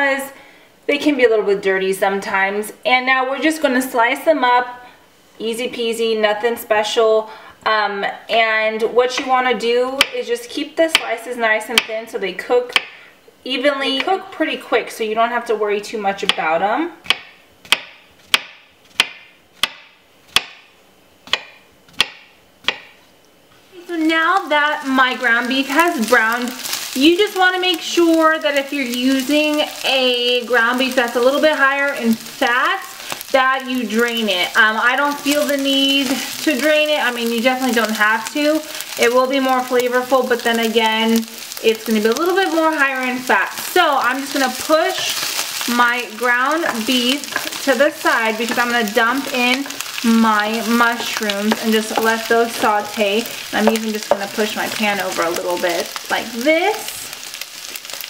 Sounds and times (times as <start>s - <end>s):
Speech: 0.0s - 12.8s, 13.4s - 17.0s, 23.8s - 57.1s.